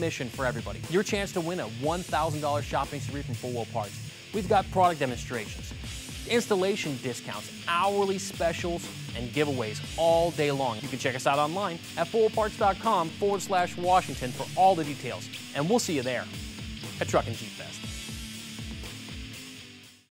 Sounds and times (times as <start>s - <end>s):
Speech: 0.0s - 5.7s, 6.3s - 17.8s
Music: 0.0s - 20.1s.